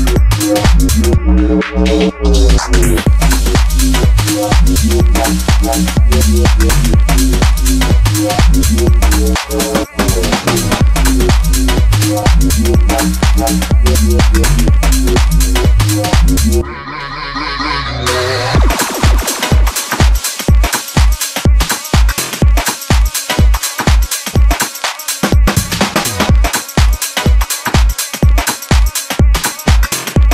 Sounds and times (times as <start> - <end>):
Drum and bass: 0.0 - 30.3.